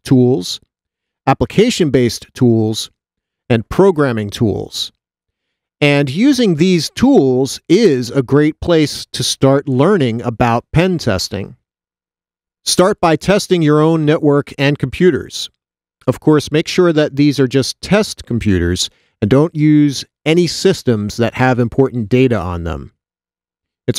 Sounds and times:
Speech: 0.0s - 0.6s, 1.3s - 5.0s, 5.8s - 11.6s, 12.7s - 23.0s.

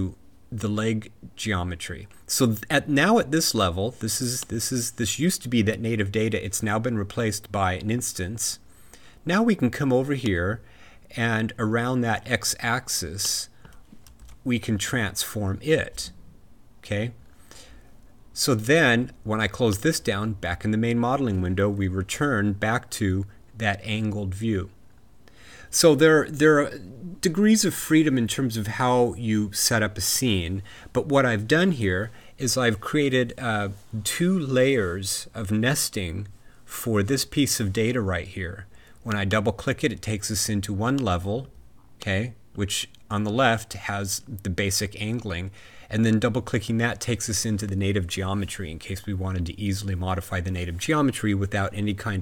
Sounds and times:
Speech: 0.0s - 13.6s, 14.4s - 16.2s, 16.8s - 17.2s, 18.4s - 24.8s, 25.7s - 52.2s.

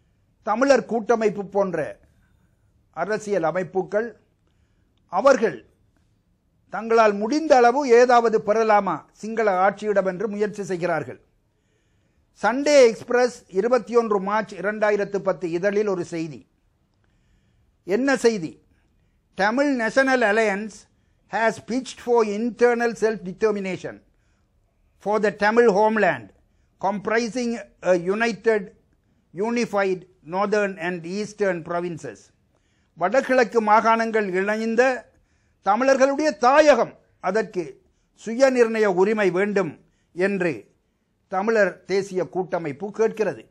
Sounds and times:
Male speech, man speaking: 0.4s - 2.0s, 3.0s - 4.2s, 5.1s - 5.7s, 6.7s - 11.2s, 12.4s - 16.5s, 17.9s - 18.6s, 19.4s - 24.0s, 25.0s - 32.3s, 33.0s - 40.7s, 41.3s - 43.5s.

